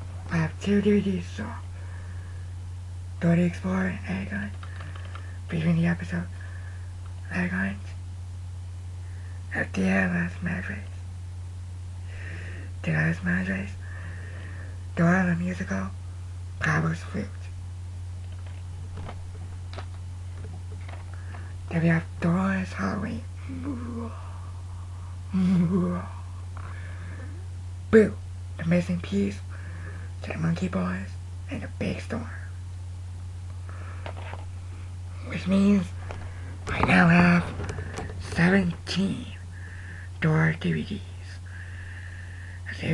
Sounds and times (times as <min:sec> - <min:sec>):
Inside, small room: 0:00.0 - 0:42.9.